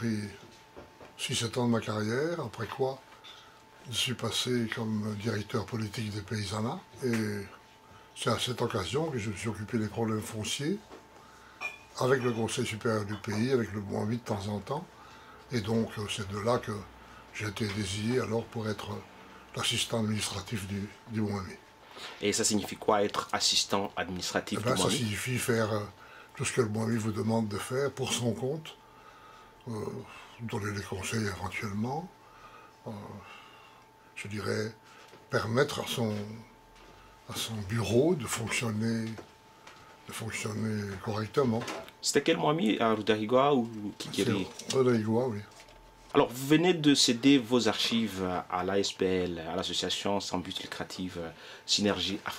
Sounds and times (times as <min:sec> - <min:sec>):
Speech: 0:00.0 - 0:00.4, 0:01.2 - 0:03.0, 0:03.8 - 0:07.6, 0:08.2 - 0:10.9, 0:12.0 - 0:14.9, 0:15.5 - 0:21.6, 0:22.2 - 0:28.8, 0:29.6 - 0:32.1, 0:32.8 - 0:33.3, 0:34.2 - 0:36.5, 0:37.3 - 0:39.3, 0:40.1 - 0:45.5, 0:46.1 - 0:52.3.